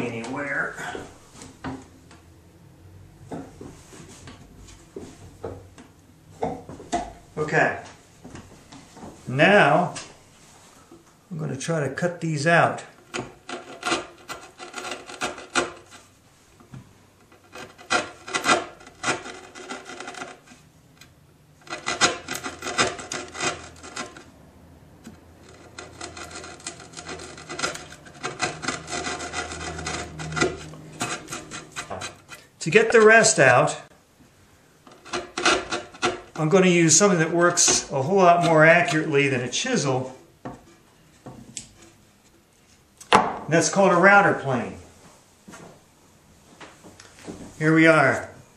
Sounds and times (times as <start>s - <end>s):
Wood: 13.0s - 20.6s, 21.6s - 24.3s, 25.0s - 33.4s, 34.9s - 39.1s, 40.0s - 42.4s, 43.1s - 43.5s
Filing (rasp): 13.1s - 16.1s, 17.4s - 20.6s, 21.6s - 24.3s, 25.4s - 32.4s, 34.9s - 36.3s.